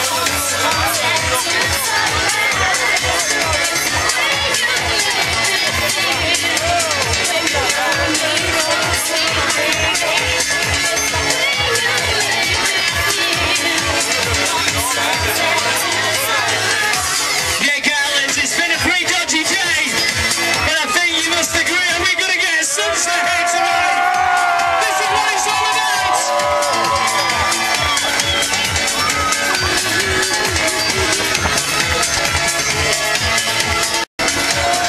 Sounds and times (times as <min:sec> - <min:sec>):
Music: 0:00.0 - 0:34.8
Speech: 0:02.9 - 0:20.0, 0:20.6 - 0:24.0, 0:24.6 - 0:26.2.